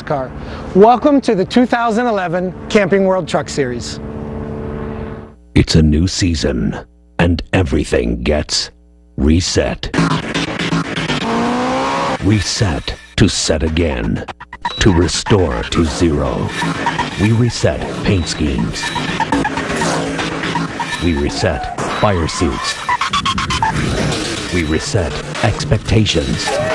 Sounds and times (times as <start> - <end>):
Speech: 0.0 - 4.0, 5.6 - 9.9, 12.2 - 16.6, 17.2 - 18.9, 21.0 - 22.8, 24.5 - 26.7
Car: 10.8 - 12.2.